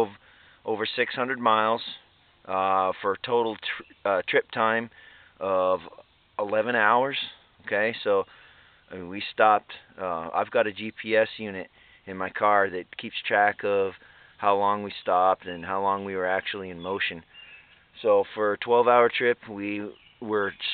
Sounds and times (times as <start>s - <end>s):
Speech: 0.0s - 8.3s, 8.9s - 17.3s, 18.0s - 20.7s.